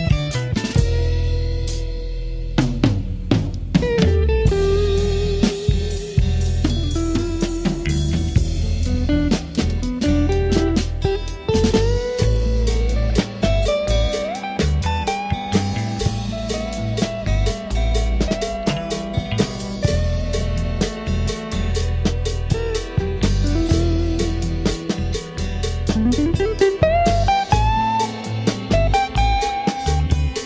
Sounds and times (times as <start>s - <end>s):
Soul music: 0.0s - 30.4s.